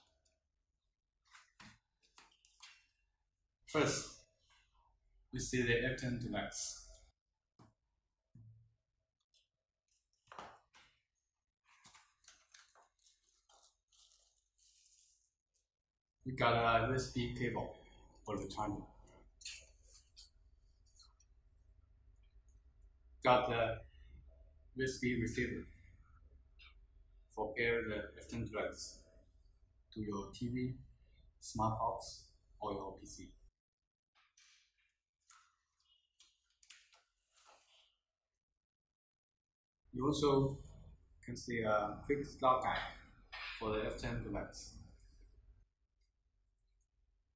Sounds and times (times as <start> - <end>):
Speech: 3.7 - 4.2, 5.3 - 7.0, 16.3 - 18.9, 23.2 - 23.9, 24.8 - 25.8, 27.3 - 29.1, 29.9 - 33.4, 40.0 - 44.8.